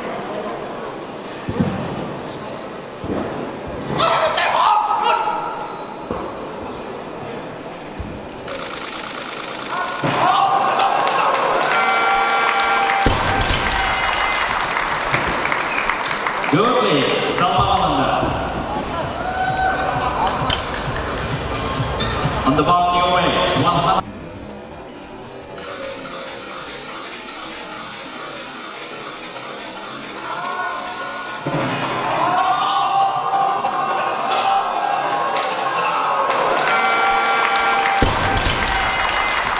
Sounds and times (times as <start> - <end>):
Inside, public space: 0.0 - 39.5
Music: 18.4 - 24.0.